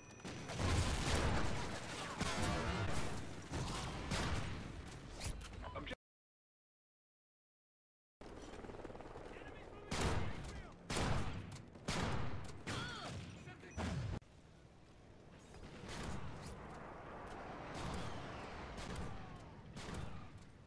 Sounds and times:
Speech: 0:09.3 - 0:10.8, 0:12.7 - 0:13.9.

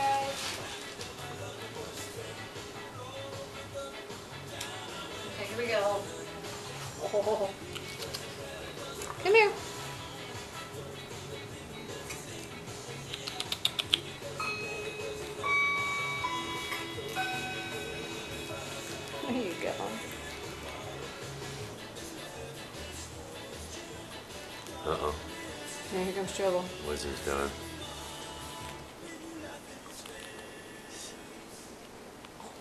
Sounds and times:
Music: 0:00.0 - 0:32.6.

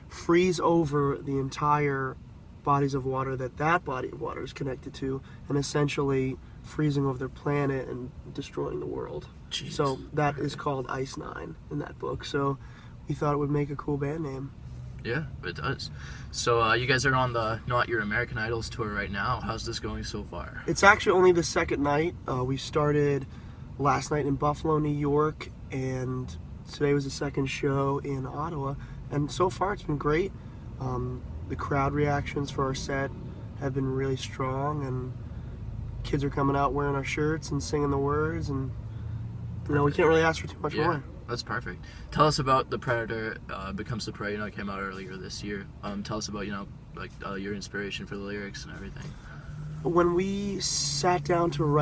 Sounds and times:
Speech: 0:00.2 - 0:23.2, 0:39.7 - 0:49.1.

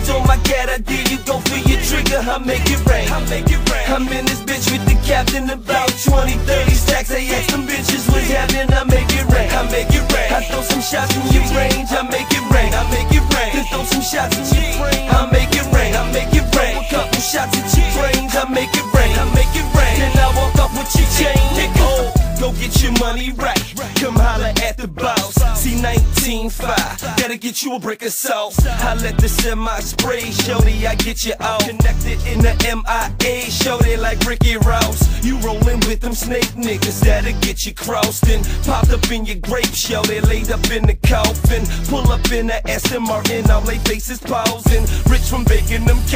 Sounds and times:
Music: 0:00.0 - 0:27.5, 0:28.6 - 0:46.1.

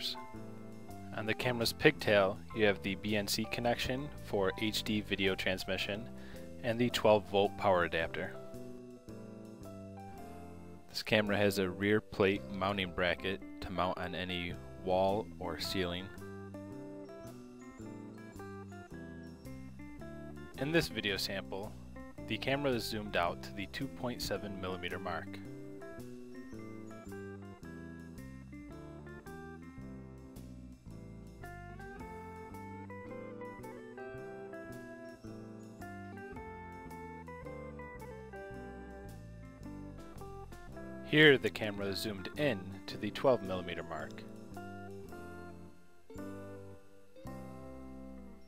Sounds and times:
Speech: 0:00.0 - 0:00.2, 0:01.1 - 0:08.4, 0:10.9 - 0:16.2, 0:20.6 - 0:21.7, 0:22.3 - 0:25.4, 0:41.1 - 0:44.3
Music: 0:00.0 - 0:48.4.

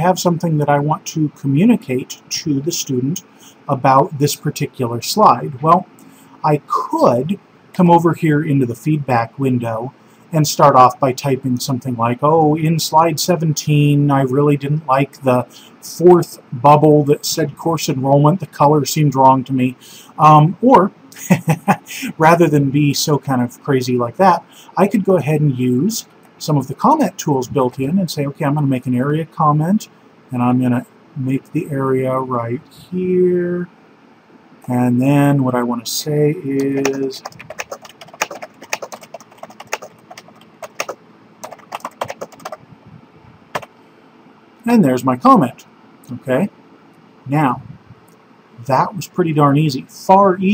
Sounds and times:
Typing: 0:36.6 - 0:42.6.

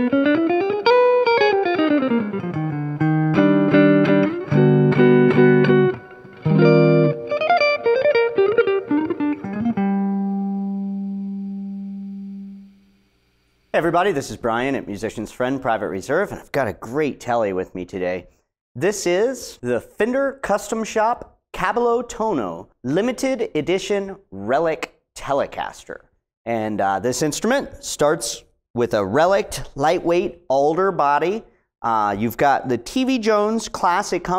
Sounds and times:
Speech: 0:13.7 - 0:34.3.

